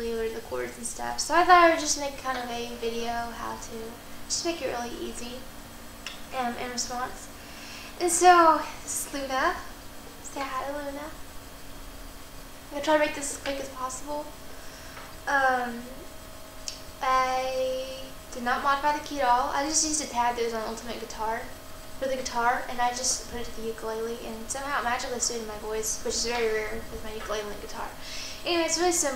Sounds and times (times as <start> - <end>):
Speech: 0.0 - 5.5, 6.1 - 7.3, 8.0 - 11.2, 12.7 - 14.3, 15.3 - 16.0, 17.0 - 29.1.